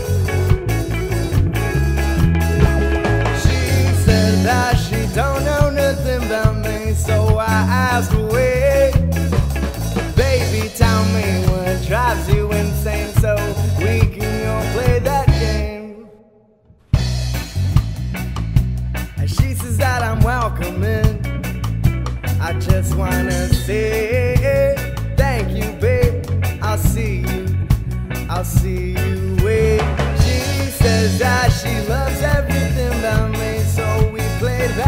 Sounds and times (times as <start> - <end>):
Ska: 0.0 - 34.8.